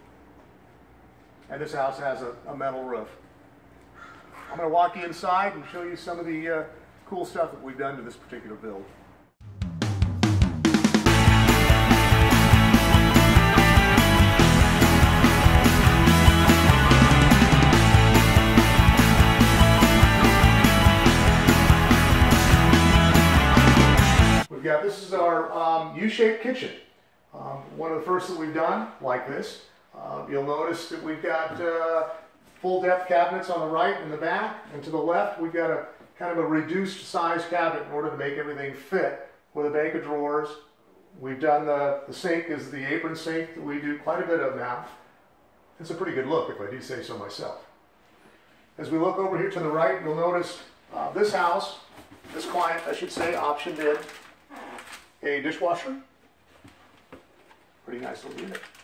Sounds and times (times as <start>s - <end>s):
Inside, small room: 0.0s - 58.8s
Speech: 1.4s - 3.2s, 4.4s - 9.0s, 24.5s - 45.0s, 45.8s - 47.7s, 48.8s - 54.2s, 55.2s - 56.2s, 57.8s - 58.7s.